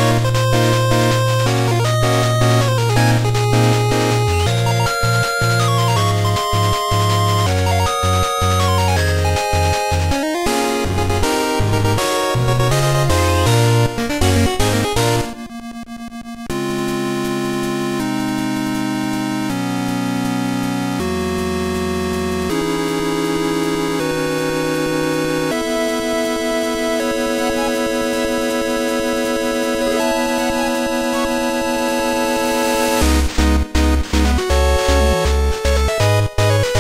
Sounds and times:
Music: 0:00.0 - 0:36.8.

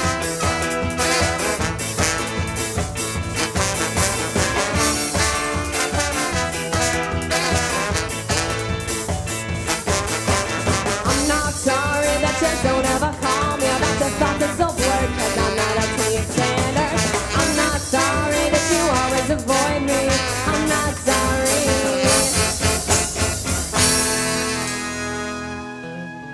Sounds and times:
Trombone: 0:00.0 - 0:26.3
Trumpet: 0:00.0 - 0:26.3.

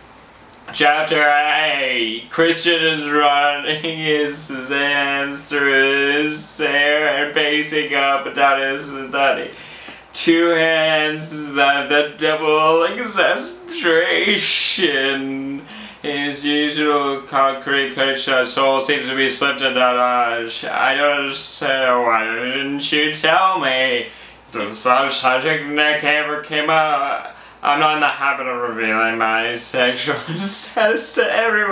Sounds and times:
Narration, monologue: 0:00.0 - 0:31.7
Male speech, man speaking: 0:00.6 - 0:31.7.

